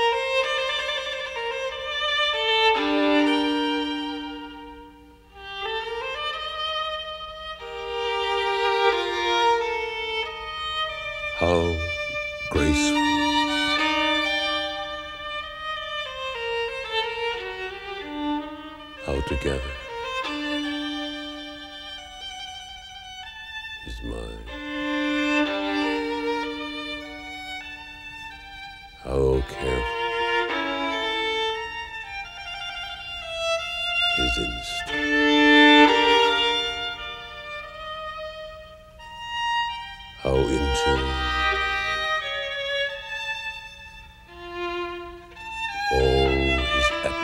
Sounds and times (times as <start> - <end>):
Bowed string instrument: 0.0 - 47.2
Speech: 11.4 - 13.4, 19.1 - 19.8, 23.9 - 24.6, 29.0 - 29.9, 34.2 - 35.0, 40.2 - 41.5, 45.9 - 47.2.